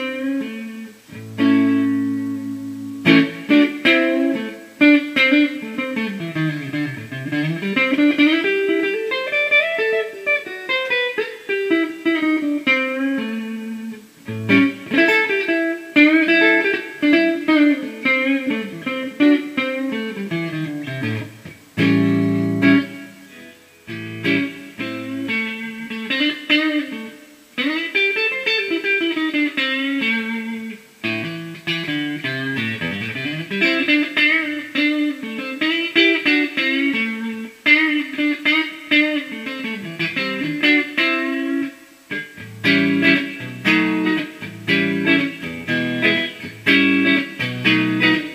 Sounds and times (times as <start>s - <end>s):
Acoustic guitar: 11.2s - 27.0s.